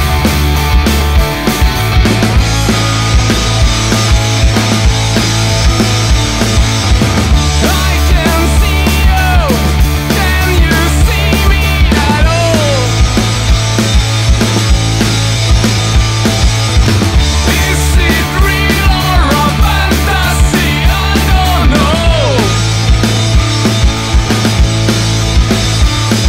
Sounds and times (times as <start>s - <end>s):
Rhythm and blues: 0.0s - 26.2s.